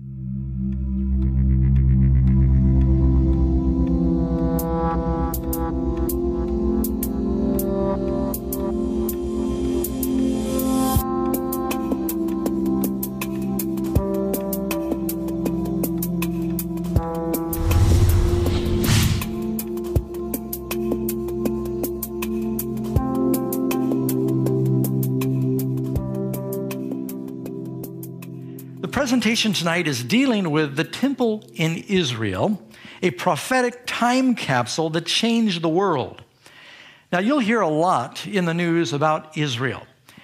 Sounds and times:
Music: 0.0 - 33.0
Speech: 28.8 - 36.3, 37.1 - 40.0.

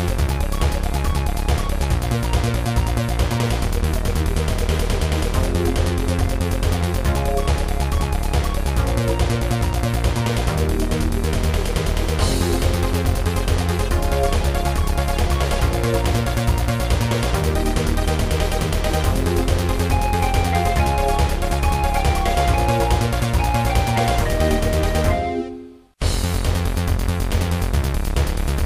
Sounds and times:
Music: 0.0 - 28.6.

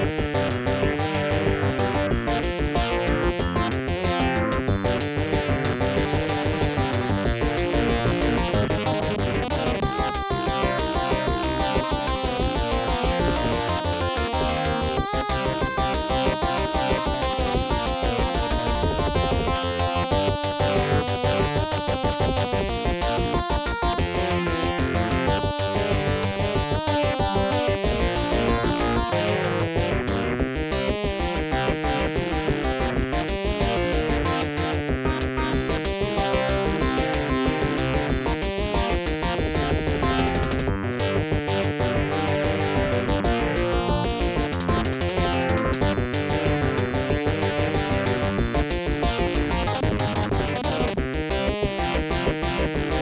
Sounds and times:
Jazz: 0.0 - 53.0.

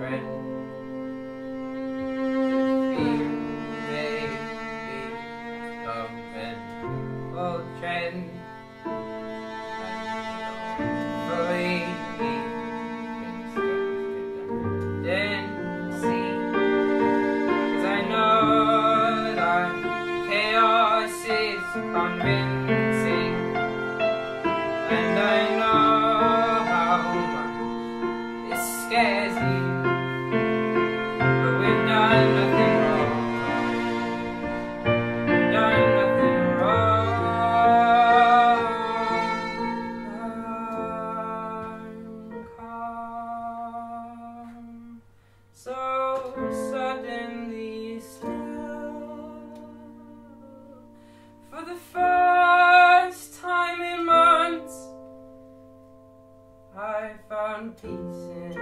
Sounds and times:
Classical music: 0.0 - 58.6.

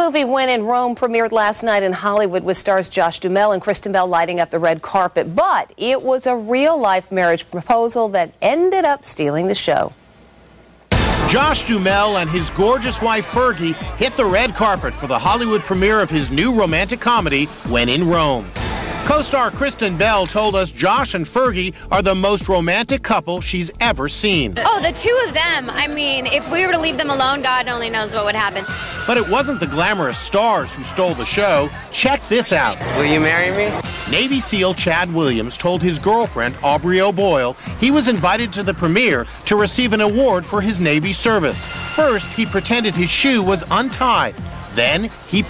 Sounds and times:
Music: 10.9 - 45.4.

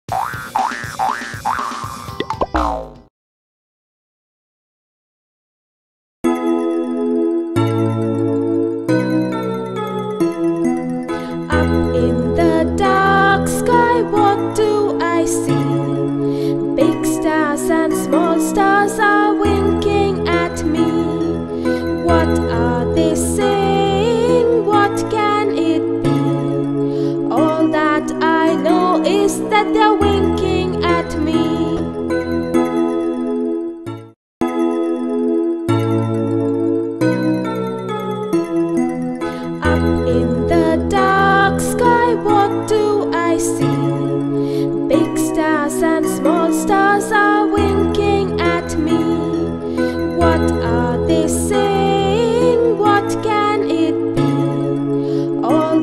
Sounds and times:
Music for children: 0.1 - 3.1, 6.2 - 55.8.

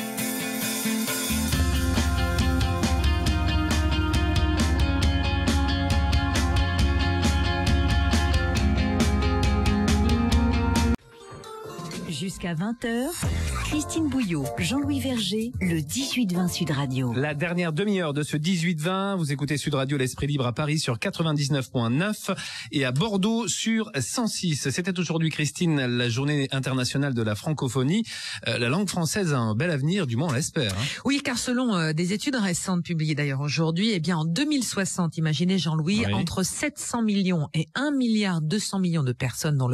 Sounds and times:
Speech: 12.0 - 39.7.

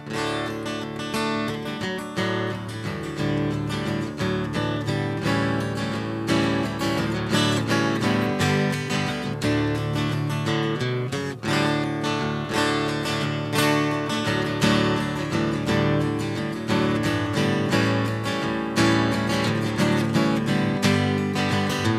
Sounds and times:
Music: 0.0 - 21.9.

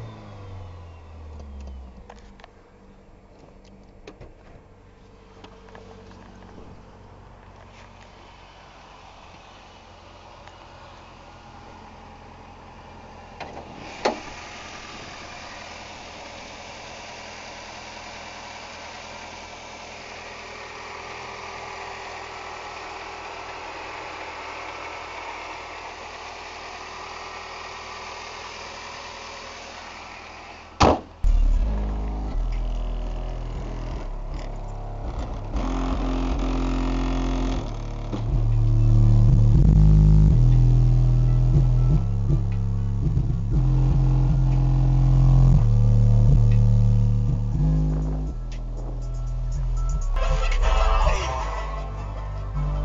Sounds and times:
Car: 0.0 - 52.8
Idling: 0.0 - 52.8
Medium engine (mid frequency): 0.0 - 52.8.

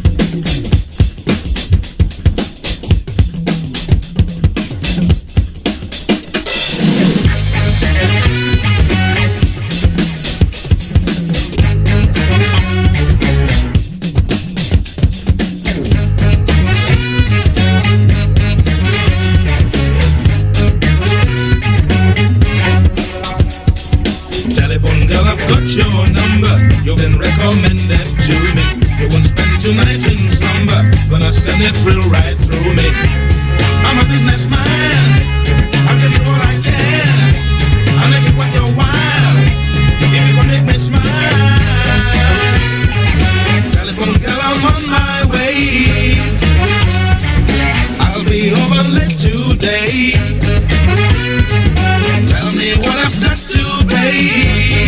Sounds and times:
Music: 0.0 - 54.8.

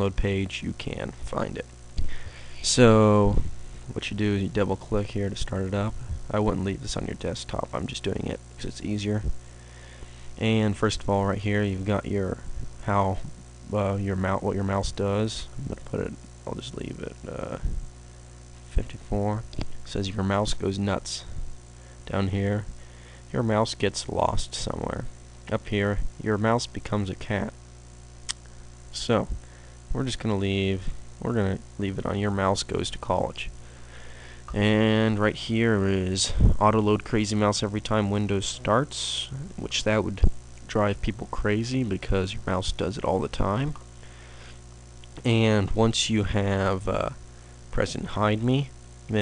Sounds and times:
Speech: 0.0 - 1.7, 2.6 - 9.4, 10.4 - 17.8, 18.7 - 21.4, 22.1 - 22.7, 23.3 - 27.6, 28.9 - 33.6, 34.5 - 43.8, 45.2 - 49.2.

